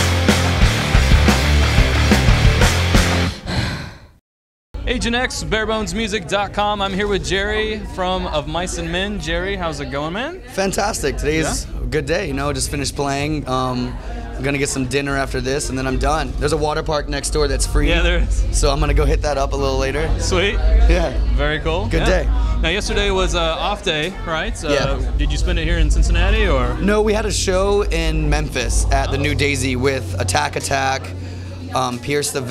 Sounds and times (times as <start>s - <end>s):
Speech: 4.8s - 32.5s.